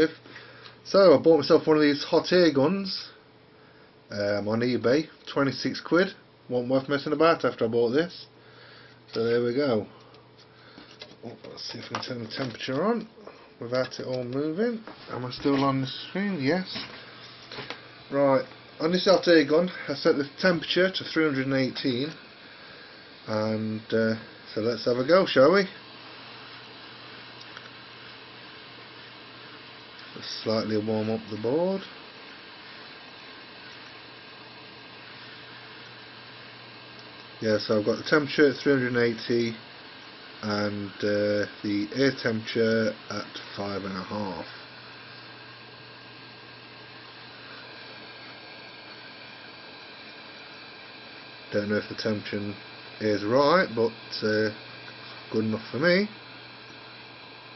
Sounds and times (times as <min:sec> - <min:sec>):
Speech: 0:00.0 - 0:00.2, 0:00.8 - 0:03.2, 0:04.1 - 0:08.3, 0:09.1 - 0:09.9, 0:11.2 - 0:16.9, 0:18.1 - 0:22.2, 0:23.2 - 0:25.8, 0:30.1 - 0:31.9, 0:37.4 - 0:39.6, 0:40.4 - 0:44.6, 0:51.5 - 0:54.6, 0:55.3 - 0:56.2.